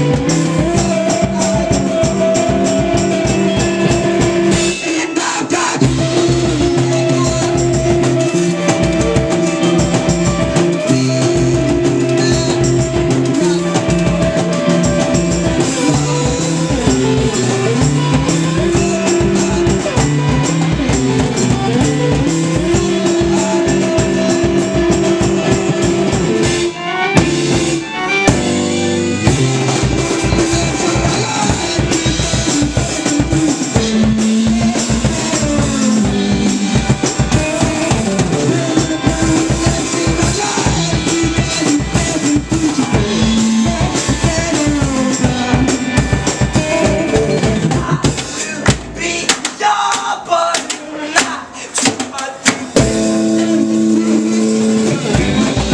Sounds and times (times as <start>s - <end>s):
Music: 0.0s - 55.7s.